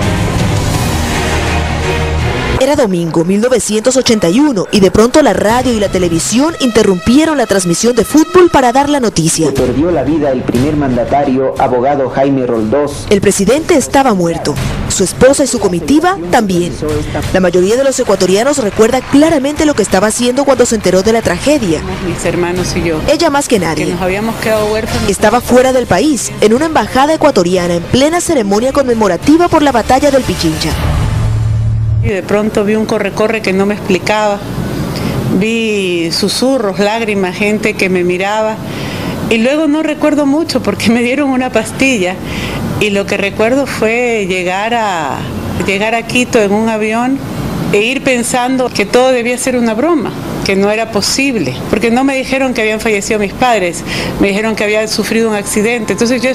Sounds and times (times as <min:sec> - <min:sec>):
Music: 0:00.0 - 0:32.8.